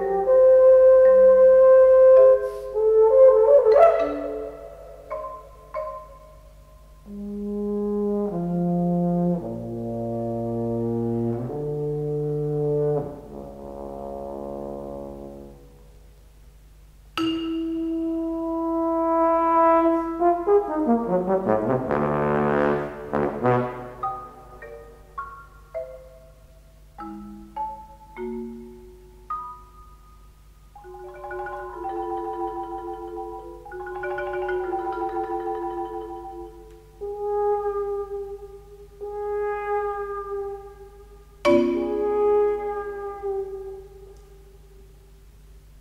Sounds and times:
Brass instrument: 0:00.0 - 0:04.9, 0:07.1 - 0:16.0, 0:17.9 - 0:24.7, 0:37.0 - 0:44.6.

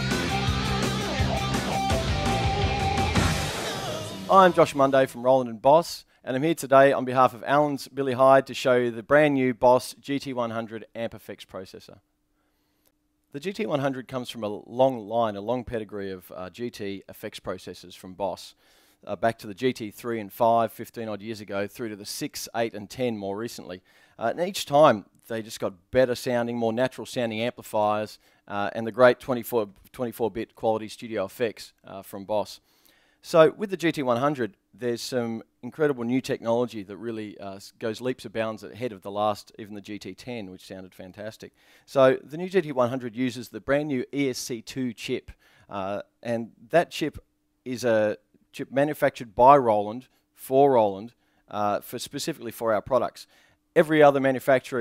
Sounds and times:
Speech: 0:04.3 - 0:12.0, 0:13.3 - 0:32.6, 0:33.2 - 0:54.8.

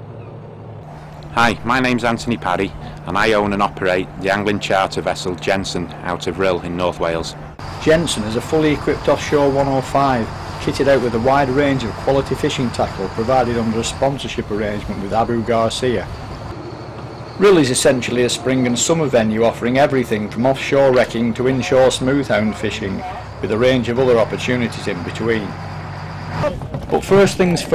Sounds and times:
Boat, Water vehicle: 0:00.0 - 0:27.7
Speech: 0:01.4 - 0:16.1, 0:17.4 - 0:25.5, 0:26.4 - 0:27.7.

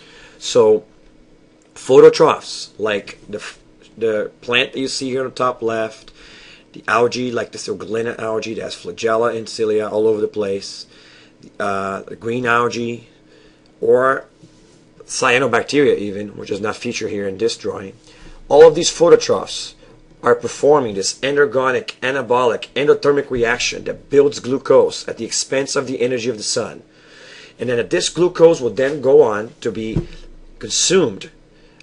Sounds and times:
Speech: 0:00.4 - 0:00.9, 0:01.8 - 0:06.1, 0:06.7 - 0:13.2, 0:13.8 - 0:14.3, 0:15.0 - 0:26.9, 0:27.6 - 0:31.4.

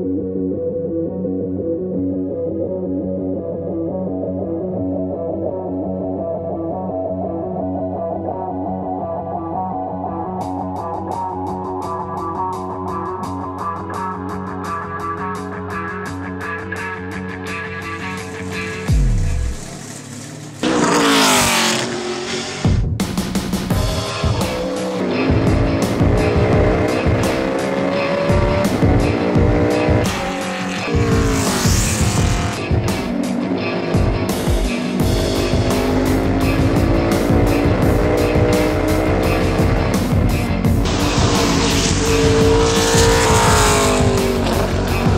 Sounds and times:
Music: 0:00.0 - 0:45.1
Car: 0:16.5 - 0:22.8, 0:23.9 - 0:45.1.

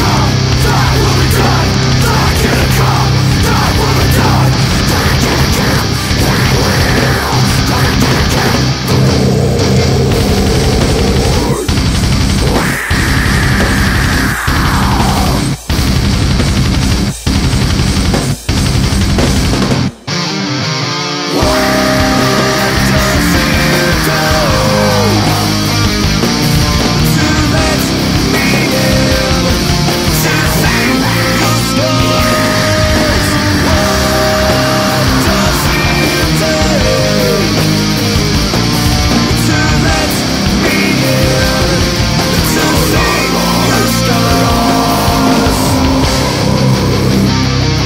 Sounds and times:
Heavy metal: 0:00.0 - 0:47.8.

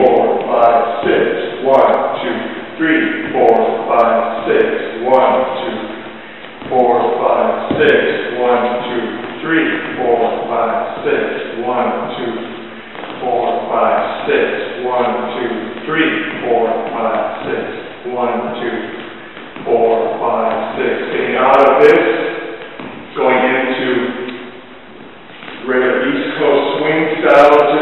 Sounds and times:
Speech: 0:00.0 - 0:06.0, 0:06.6 - 0:12.6, 0:13.2 - 0:19.0, 0:19.6 - 0:22.4, 0:23.1 - 0:24.4, 0:25.6 - 0:27.8.

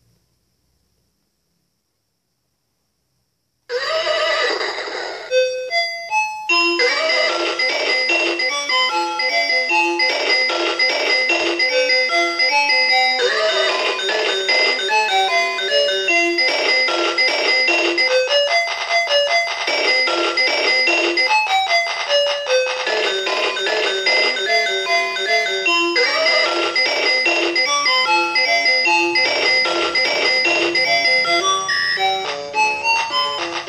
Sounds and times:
Piano: 0:05.3 - 0:33.6.

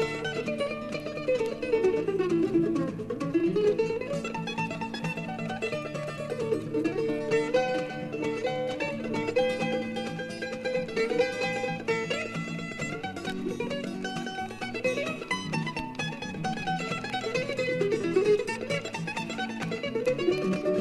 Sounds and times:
Mandolin: 0:00.0 - 0:20.8.

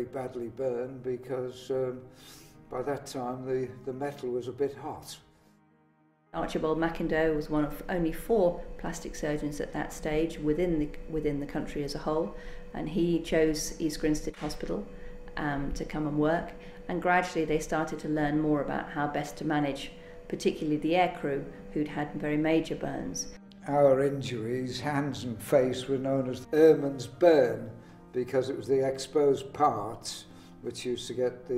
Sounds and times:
Speech: 0:02.7 - 0:05.2, 0:15.4 - 0:31.5.

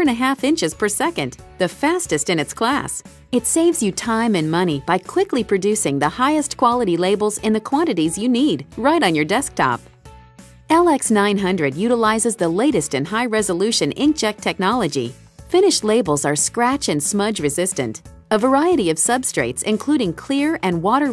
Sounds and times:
Speech: 0:00.0 - 0:09.8, 0:10.7 - 0:21.1
Music: 0:00.0 - 0:21.1.

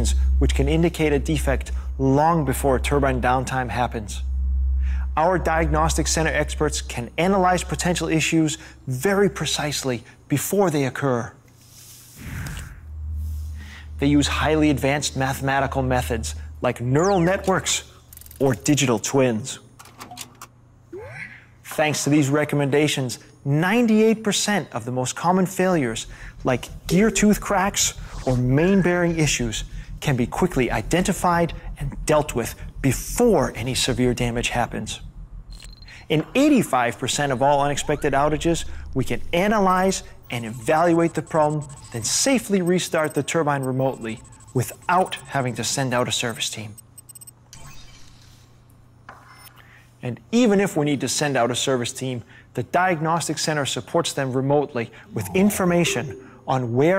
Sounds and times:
Speech: 0:00.0 - 0:04.2, 0:05.2 - 0:11.4, 0:14.0 - 0:19.6, 0:21.0 - 0:35.0, 0:36.0 - 0:46.8, 0:50.0 - 0:56.9.

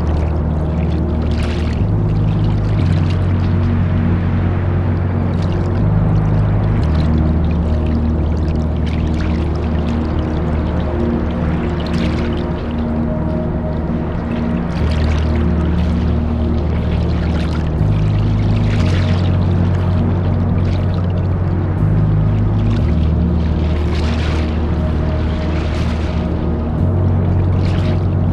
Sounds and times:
Music: 0:00.0 - 0:28.3.

